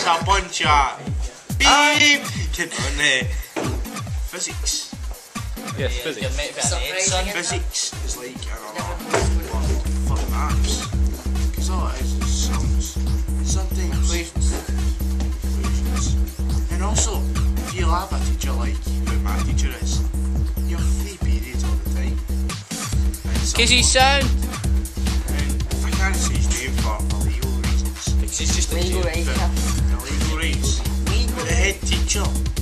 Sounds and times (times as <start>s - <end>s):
Speech: 0.0s - 3.3s, 5.8s - 10.9s, 11.6s - 12.9s, 13.5s - 14.6s, 15.6s - 20.0s, 20.7s - 22.2s, 23.4s - 24.3s, 25.3s - 32.4s
Music: 0.0s - 32.6s.